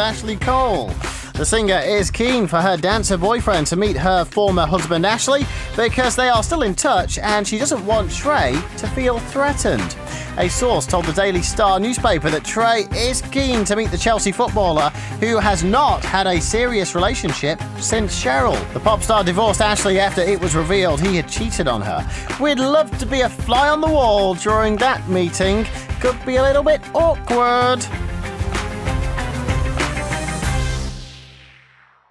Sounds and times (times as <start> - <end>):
Speech: 0.0 - 27.9
Music: 0.0 - 32.1.